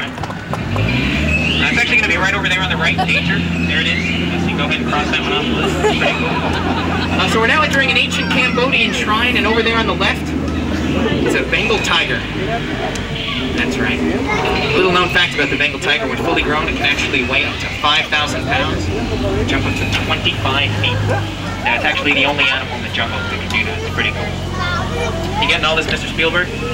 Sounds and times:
Boat, Water vehicle: 0.0s - 26.7s
Speech: 1.6s - 6.2s, 7.1s - 26.7s.

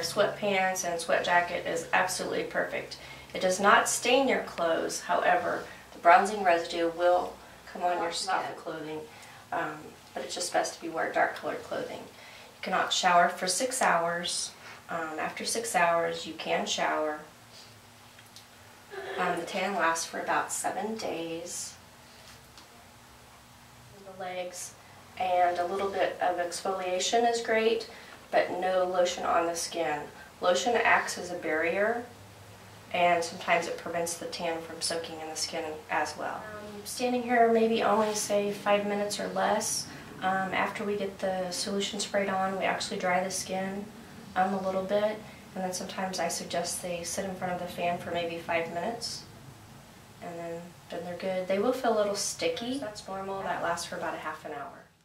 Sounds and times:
Speech: 0.0s - 17.3s, 19.0s - 21.8s, 24.0s - 32.1s, 32.9s - 49.3s, 50.2s - 55.0s.

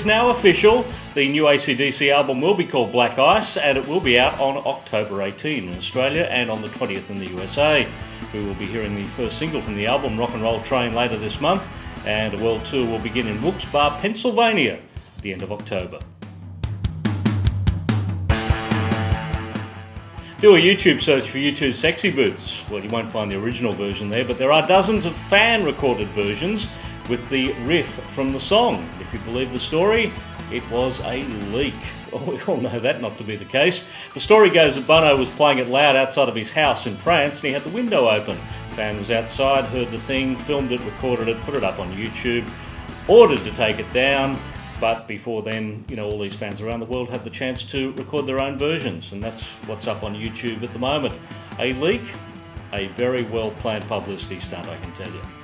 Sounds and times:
Speech: 0.0s - 16.1s, 20.4s - 42.5s, 43.1s - 55.4s
Background music: 0.0s - 55.4s.

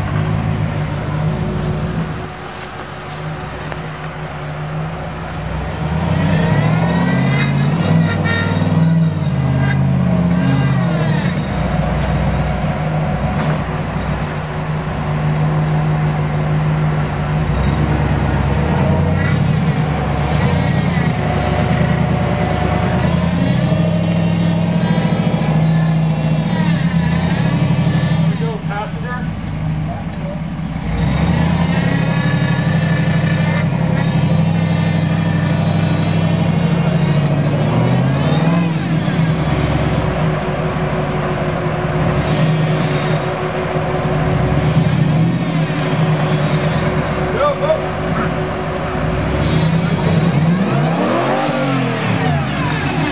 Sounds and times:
Outside, rural or natural: 0.0s - 53.1s
Vehicle: 0.0s - 53.1s
Speech: 28.4s - 30.4s, 47.3s - 48.3s.

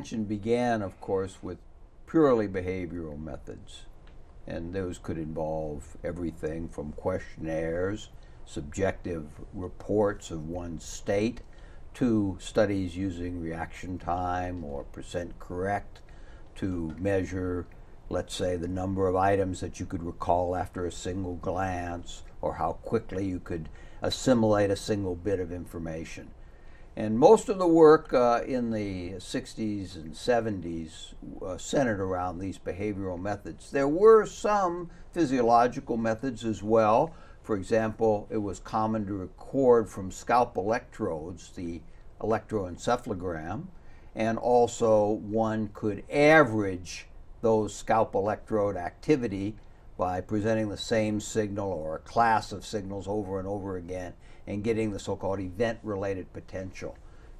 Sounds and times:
Speech: 0.0s - 26.4s, 27.0s - 57.0s.

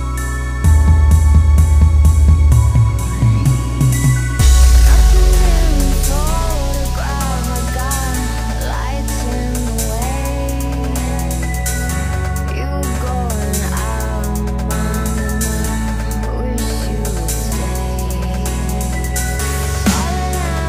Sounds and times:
Dubstep: 2.2s - 20.6s.

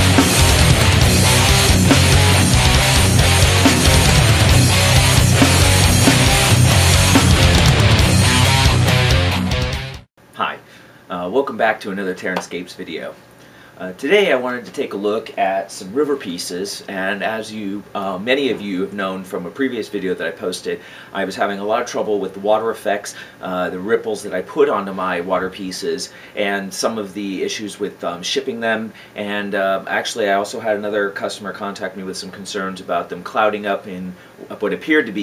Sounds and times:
Speech: 10.4s - 13.2s, 13.8s - 35.2s.

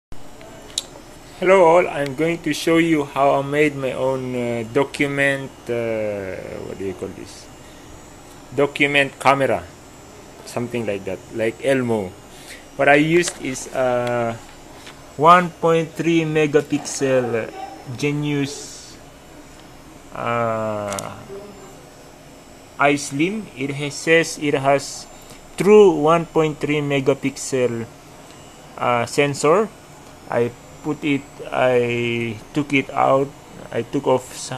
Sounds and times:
Speech: 1.4s - 7.5s, 8.5s - 9.7s, 10.4s - 12.2s, 12.8s - 14.4s, 15.2s - 19.0s, 20.1s - 21.8s, 22.8s - 27.9s, 28.8s - 29.7s, 30.3s - 34.5s.

